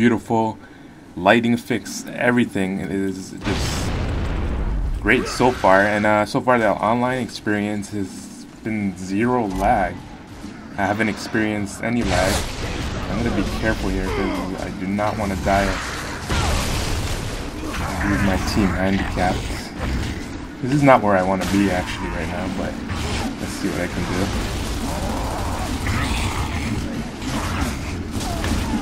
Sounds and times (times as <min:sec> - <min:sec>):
Speech: 0:00.0 - 0:00.6, 0:01.2 - 0:03.9, 0:05.0 - 0:10.0, 0:10.8 - 0:12.5, 0:13.1 - 0:15.8, 0:17.7 - 0:19.8, 0:20.6 - 0:22.8, 0:23.4 - 0:24.4.